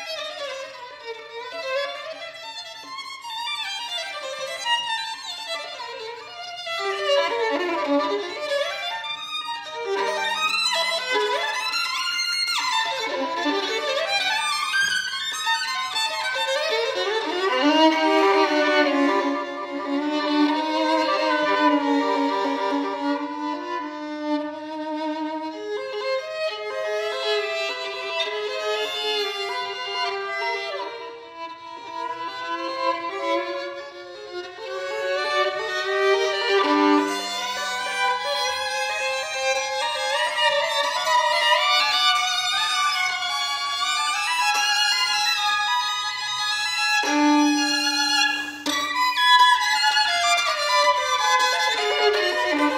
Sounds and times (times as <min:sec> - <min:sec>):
Violin, fiddle: 0:00.0 - 0:52.7.